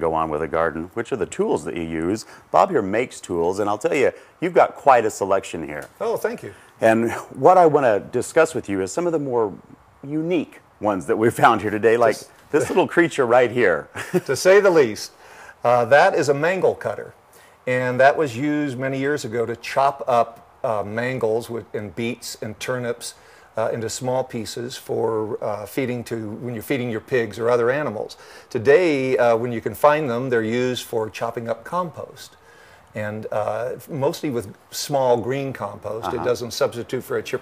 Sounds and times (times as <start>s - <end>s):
Speech: 0.0s - 32.4s, 33.0s - 37.4s.